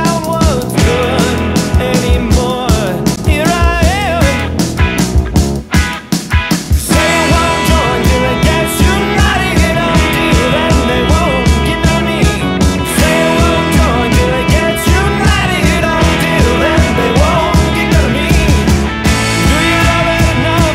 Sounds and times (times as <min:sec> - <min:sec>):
Grunge: 0:00.0 - 0:20.7.